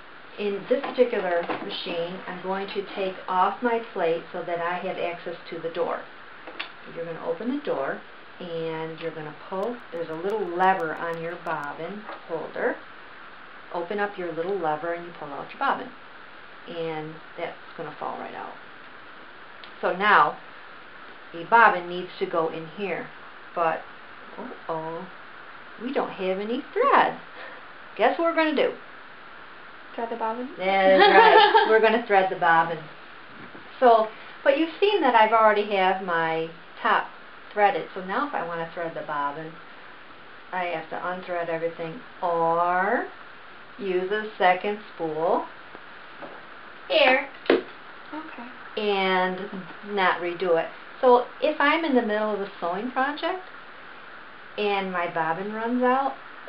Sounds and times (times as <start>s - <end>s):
Inside, small room: 0.0s - 56.4s
Speech: 0.4s - 6.1s, 6.9s - 12.8s, 13.8s - 16.0s, 16.7s - 18.6s, 19.7s - 20.4s, 21.4s - 25.1s, 25.8s - 27.2s, 28.0s - 28.8s, 30.0s - 32.9s, 33.8s - 39.6s, 40.5s - 43.1s, 43.8s - 45.5s, 46.9s - 47.4s, 48.1s - 53.5s, 54.6s - 56.2s.